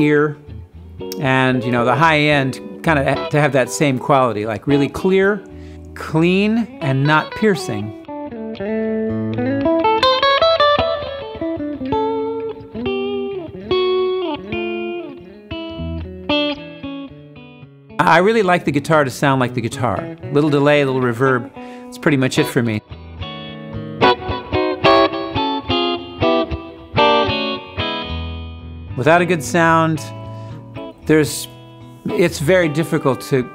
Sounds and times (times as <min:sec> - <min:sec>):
Speech: 0:00.0 - 0:00.4, 0:01.2 - 0:05.4, 0:06.0 - 0:08.0, 0:18.0 - 0:22.8, 0:29.0 - 0:30.2, 0:31.0 - 0:33.5
Bass guitar: 0:00.0 - 0:33.5
Blues: 0:00.0 - 0:33.5.